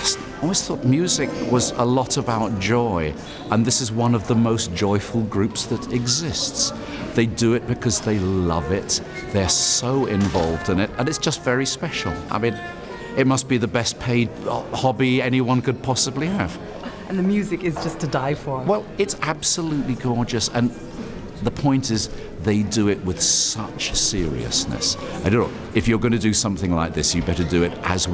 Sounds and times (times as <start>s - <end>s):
Speech: 0.0s - 20.8s, 21.4s - 28.1s
Inside, public space: 0.0s - 28.1s.